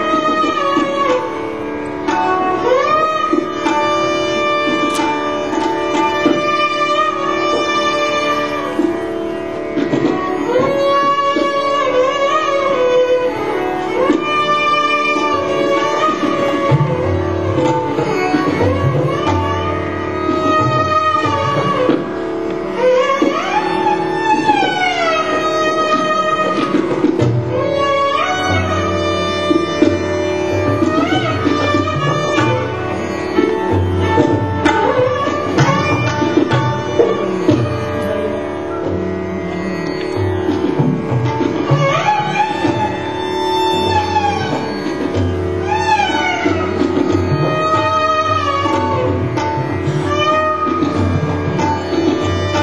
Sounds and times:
Violin, fiddle: 0:00.0 - 0:52.6.

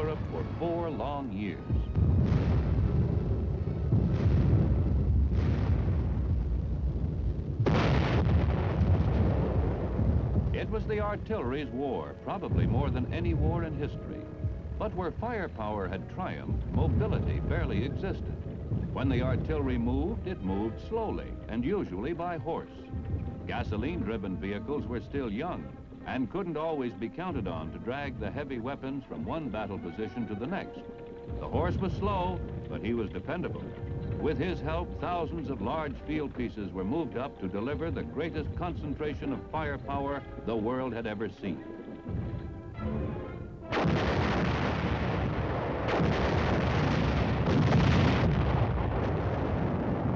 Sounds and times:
Speech: 0:00.0 - 0:01.9, 0:10.6 - 0:18.3, 0:19.0 - 0:22.8, 0:23.5 - 0:41.7
Artillery fire: 0:01.8 - 0:11.2, 0:43.6 - 0:50.1.

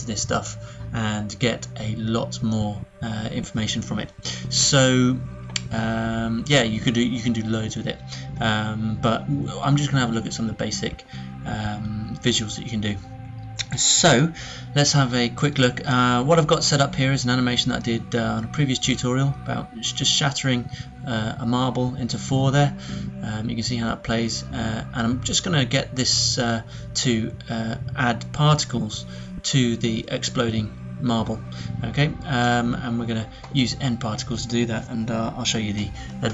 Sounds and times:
Speech: 0:00.0 - 0:13.0, 0:13.6 - 0:36.3
Music: 0:00.0 - 0:36.3.

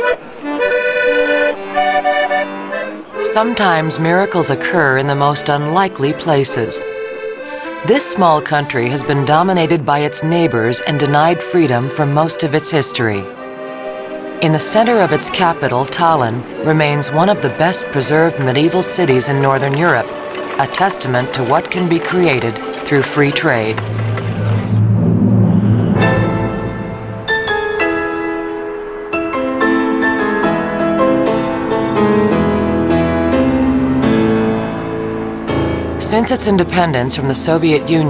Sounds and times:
Music: 0:00.0 - 0:38.1
Speech: 0:03.2 - 0:06.8, 0:07.8 - 0:13.3, 0:14.4 - 0:23.8, 0:36.0 - 0:38.1.

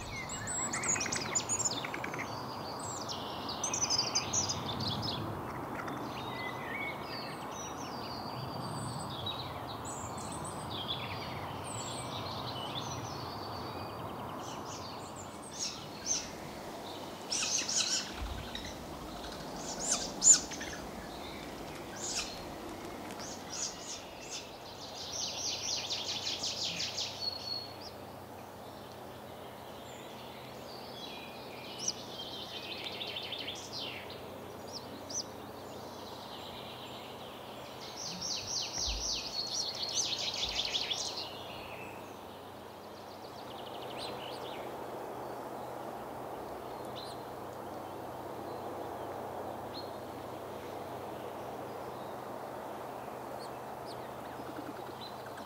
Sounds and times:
Bird: 0:00.0 - 0:28.0, 0:29.9 - 0:42.4, 0:53.0 - 0:55.4.

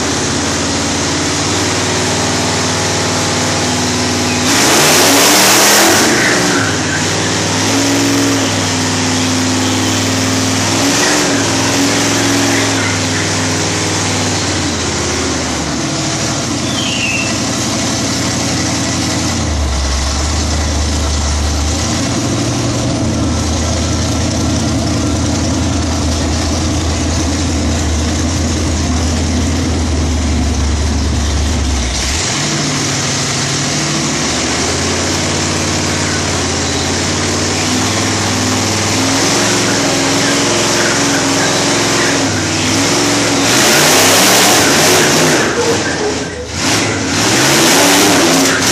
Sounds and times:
Vehicle: 0:00.0 - 0:48.7.

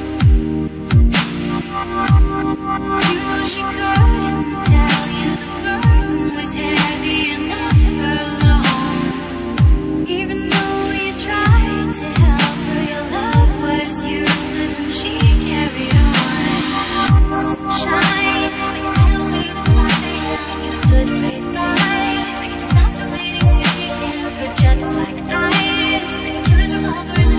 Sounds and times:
Dubstep: 0:00.0 - 0:27.3.

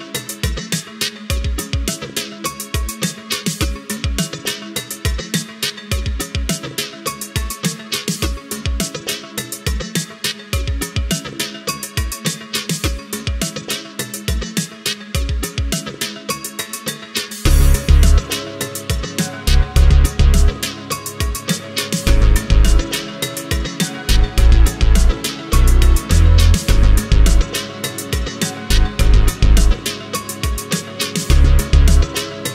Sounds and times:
Music: 0:00.0 - 0:32.5.

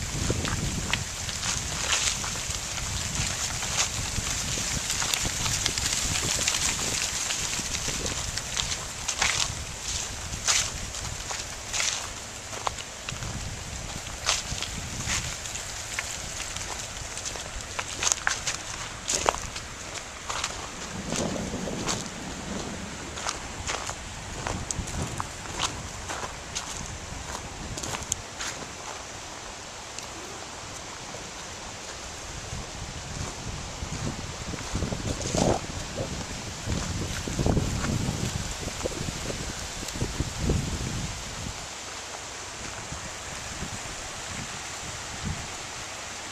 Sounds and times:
Rustling leaves: 0:00.0 - 0:46.3.

